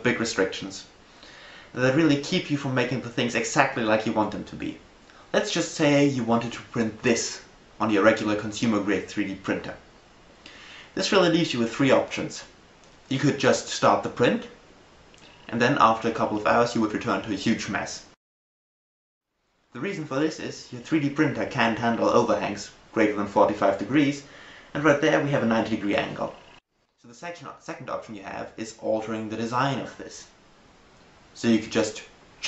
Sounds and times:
Speech: 0:00.0 - 0:00.9, 0:01.8 - 0:09.8, 0:11.0 - 0:12.5, 0:13.1 - 0:14.6, 0:15.5 - 0:18.2, 0:19.8 - 0:30.4, 0:31.4 - 0:32.4.

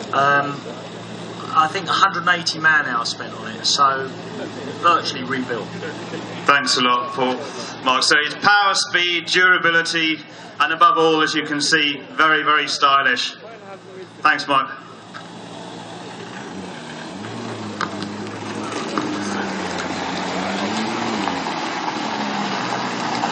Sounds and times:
Car: 0:00.0 - 0:23.3
Outside, urban or manmade: 0:00.0 - 0:23.3
Speech: 0:00.1 - 0:00.8, 0:01.4 - 0:14.9.

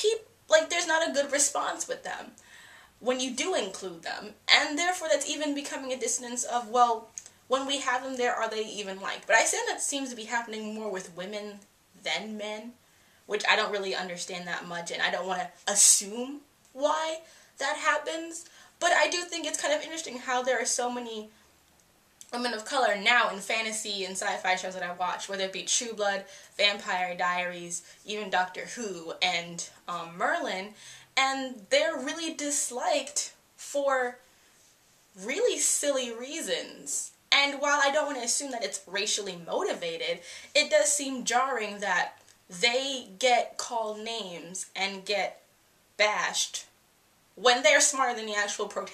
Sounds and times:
Speech: 0:00.0 - 0:02.4, 0:03.0 - 0:21.3, 0:22.3 - 0:34.2, 0:35.2 - 0:45.4, 0:46.0 - 0:46.7, 0:47.4 - 0:48.9.

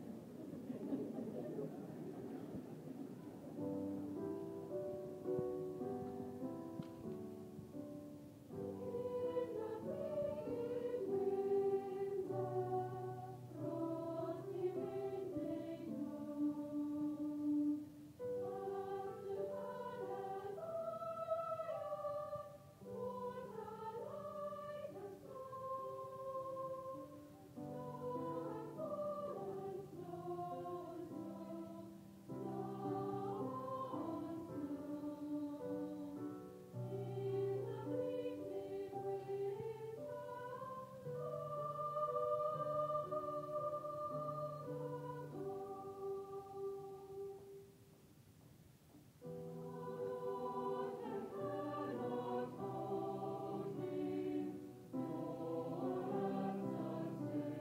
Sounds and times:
Choir: 0:00.0 - 0:47.8, 0:49.2 - 0:57.6.

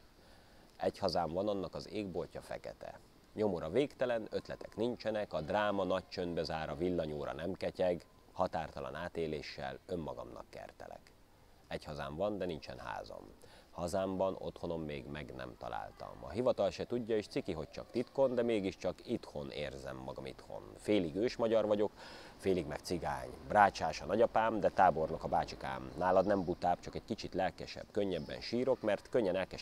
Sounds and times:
Speech: 0:00.8 - 0:11.1, 0:11.7 - 0:29.6.

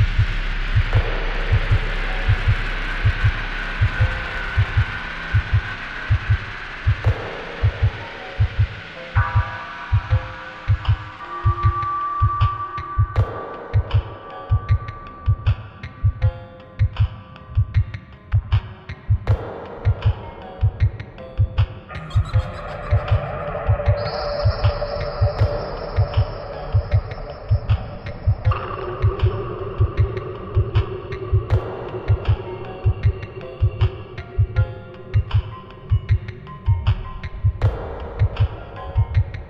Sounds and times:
Dubstep: 0:21.9 - 0:30.9.

